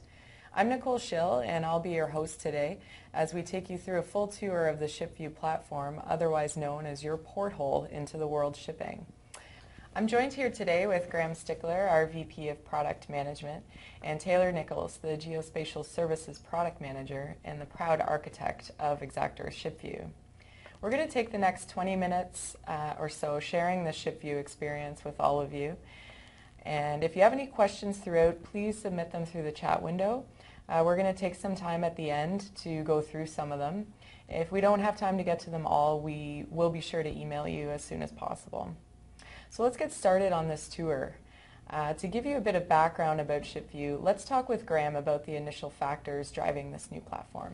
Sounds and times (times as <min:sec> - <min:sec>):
Speech: 0:00.6 - 0:09.1, 0:10.0 - 0:20.2, 0:20.8 - 0:25.8, 0:26.6 - 0:38.8, 0:39.5 - 0:47.5.